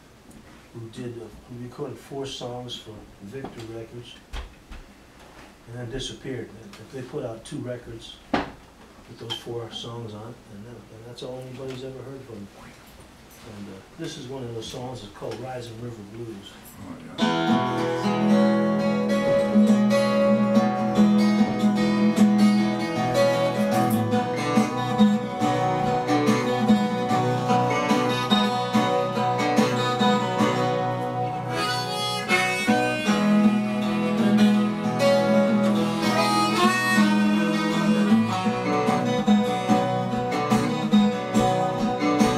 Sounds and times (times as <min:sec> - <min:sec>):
Speech: 0:00.8 - 0:04.3, 0:05.7 - 0:08.2, 0:09.1 - 0:12.8, 0:13.4 - 0:17.3
Music: 0:17.2 - 0:42.3.